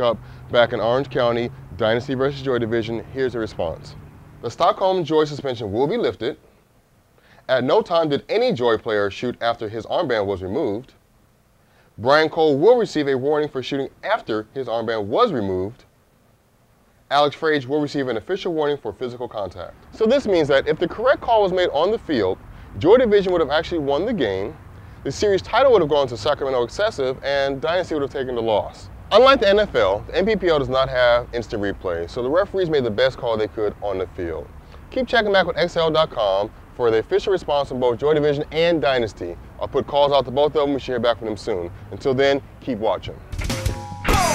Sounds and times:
Speech: 0:00.0 - 0:06.5, 0:07.5 - 0:11.0, 0:12.0 - 0:15.9, 0:17.1 - 0:43.2.

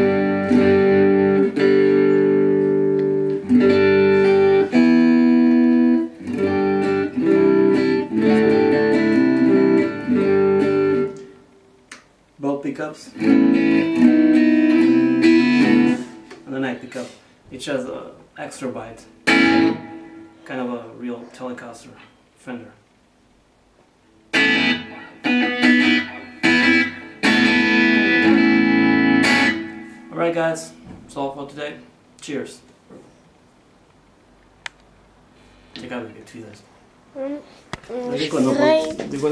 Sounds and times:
Guitar: 0:00.0 - 0:22.6, 0:23.7 - 0:32.3, 0:34.6 - 0:39.3
Inside, small room: 0:00.0 - 0:39.3.

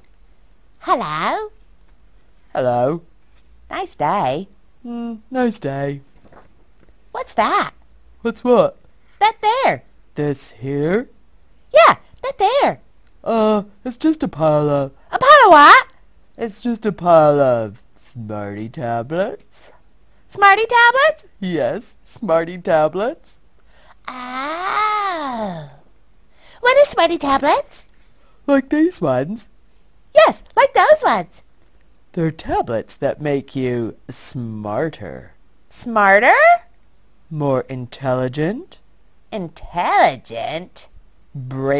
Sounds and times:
Speech: 0:00.8 - 0:01.6, 0:02.5 - 0:03.1, 0:03.7 - 0:06.1, 0:07.2 - 0:11.1, 0:11.7 - 0:23.4, 0:26.6 - 0:27.9, 0:28.5 - 0:29.5, 0:30.2 - 0:31.4, 0:32.1 - 0:36.7, 0:37.3 - 0:41.7.

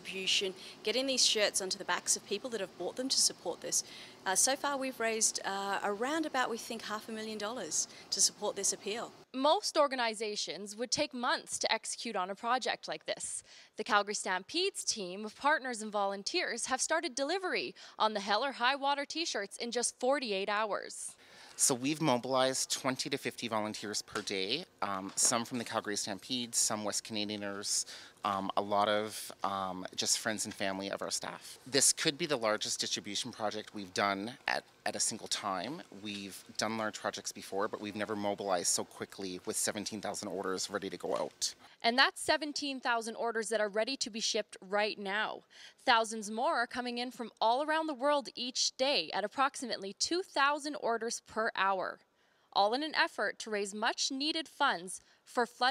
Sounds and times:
Speech: 0:00.0 - 0:52.0, 0:52.6 - 0:55.7.

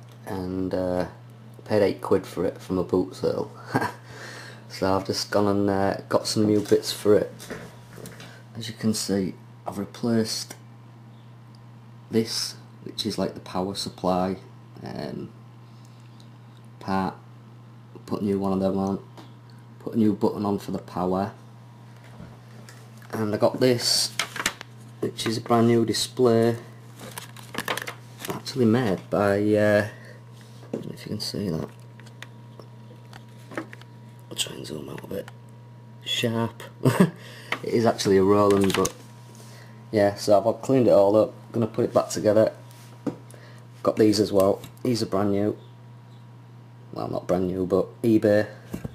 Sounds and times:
Speech: 0:00.2 - 0:03.6, 0:04.7 - 0:07.4, 0:08.5 - 0:10.6, 0:12.1 - 0:15.4, 0:16.8 - 0:17.2, 0:18.0 - 0:19.1, 0:19.8 - 0:21.4, 0:23.1 - 0:24.2, 0:25.0 - 0:26.7, 0:28.3 - 0:30.0, 0:30.8 - 0:31.8, 0:34.3 - 0:35.4, 0:36.0 - 0:36.8, 0:37.6 - 0:39.0, 0:39.9 - 0:42.6, 0:43.8 - 0:45.6, 0:46.9 - 0:48.6.

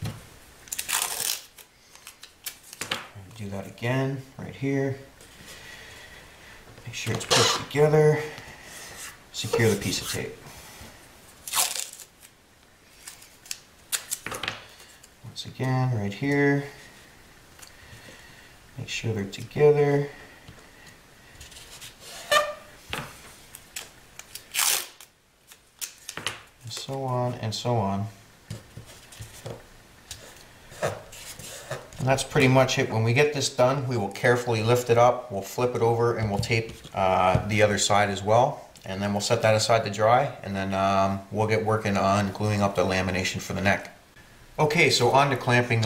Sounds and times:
Speech: 0:03.2 - 0:05.1, 0:06.8 - 0:08.3, 0:09.3 - 0:10.4, 0:15.2 - 0:16.8, 0:18.8 - 0:20.2, 0:26.7 - 0:28.2, 0:32.0 - 0:44.0, 0:44.6 - 0:45.8.

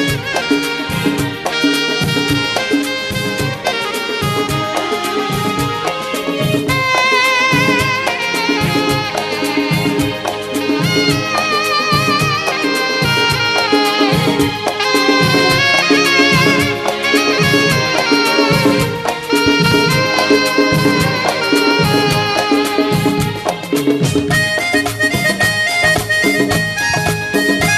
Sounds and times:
Drum kit: 0:00.0 - 0:27.7
Music of Bollywood: 0:00.0 - 0:27.7
Saxophone: 0:00.0 - 0:27.7.

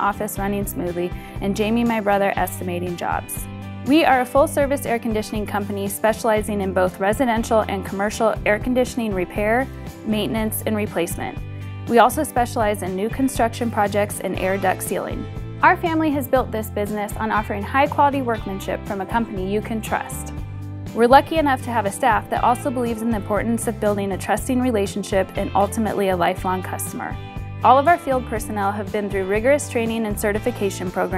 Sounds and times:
Speech: 0:00.0 - 0:20.3, 0:21.0 - 0:31.1
Music: 0:00.0 - 0:31.1.

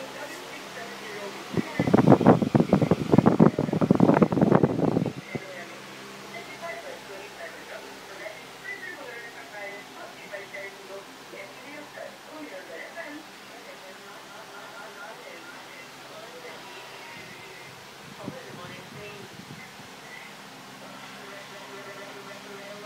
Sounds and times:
Speech: 0:00.0 - 0:22.8.

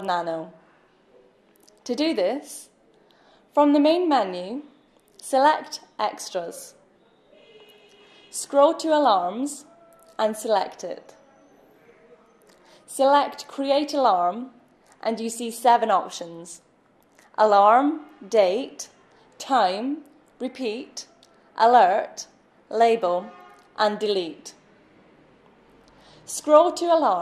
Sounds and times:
Speech: 0:01.7 - 0:02.8, 0:05.2 - 0:06.8, 0:08.4 - 0:16.6, 0:17.4 - 0:24.6.

